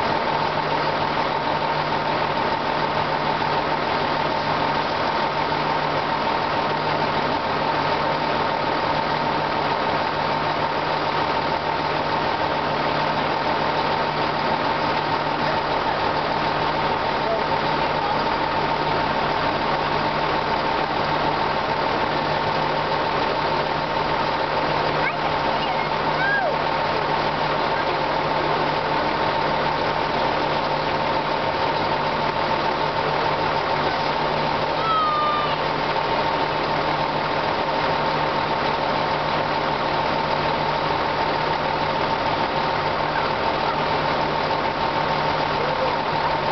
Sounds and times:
Railroad car, train wagon: 0.0 - 46.5
Train: 0.0 - 46.5.

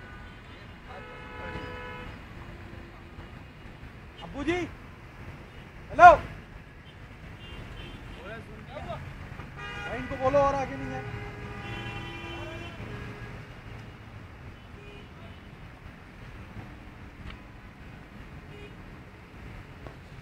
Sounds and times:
Vehicle: 0.0 - 20.2
Speech: 4.2 - 4.7, 8.2 - 9.0, 9.9 - 11.1.

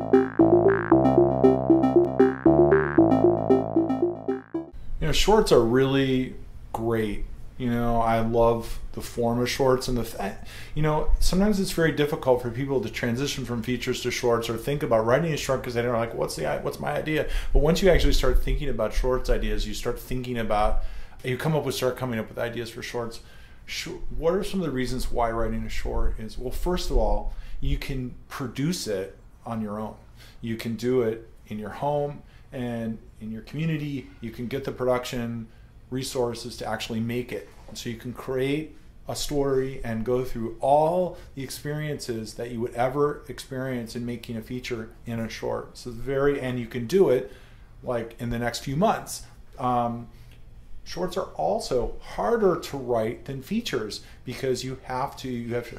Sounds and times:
Speech: 5.0 - 50.2, 50.9 - 55.7.

